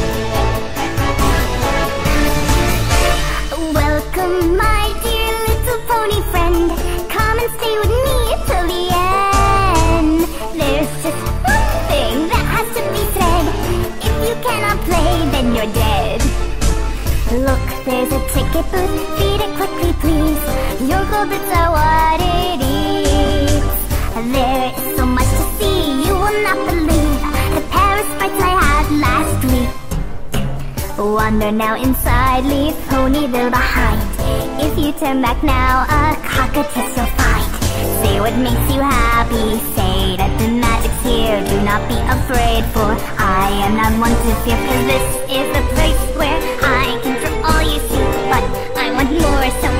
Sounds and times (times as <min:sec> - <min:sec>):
Music: 0:00.0 - 0:49.7.